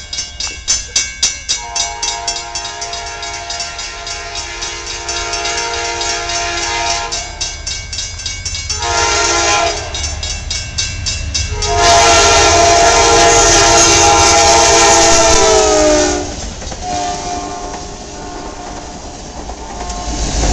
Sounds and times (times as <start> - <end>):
Railroad car, train wagon: 0.0 - 20.5
Train: 0.0 - 20.5.